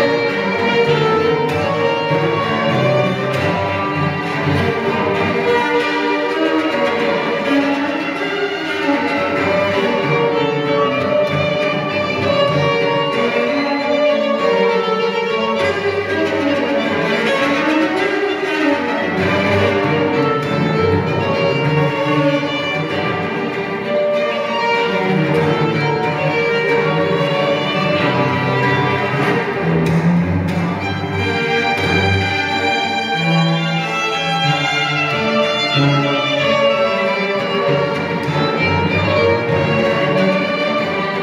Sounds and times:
Violin, fiddle: 0:00.0 - 0:41.2.

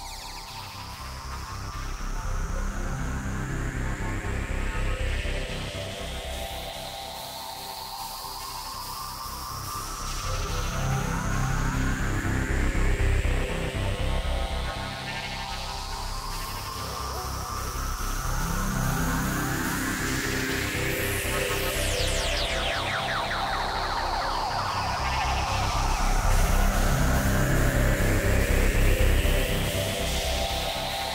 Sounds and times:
Electronica: 0:00.0 - 0:31.1.

